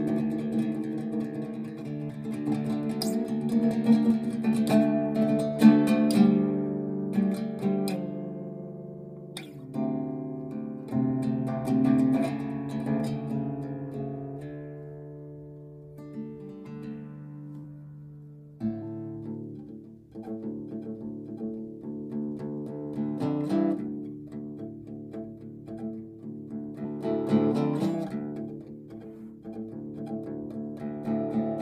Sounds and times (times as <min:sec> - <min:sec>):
Acoustic guitar: 0:00.0 - 0:31.6
Strum: 0:00.0 - 0:31.6.